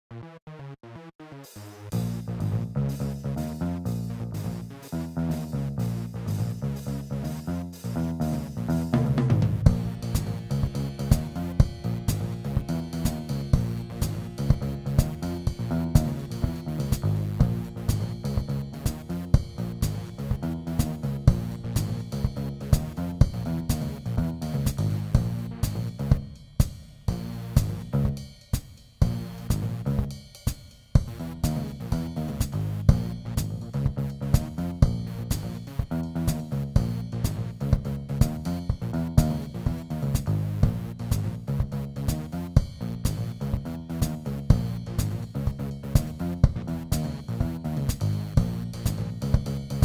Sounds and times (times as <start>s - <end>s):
Funk: 1.4s - 49.8s.